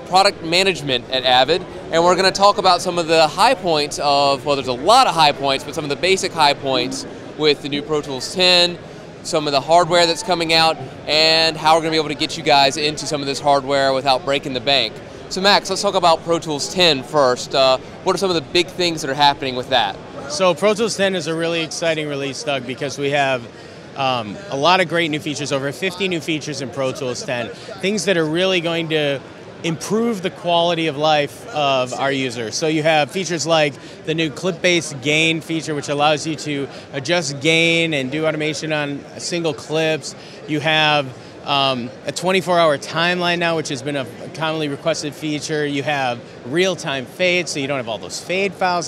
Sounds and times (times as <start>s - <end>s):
Speech: 0.0s - 48.8s.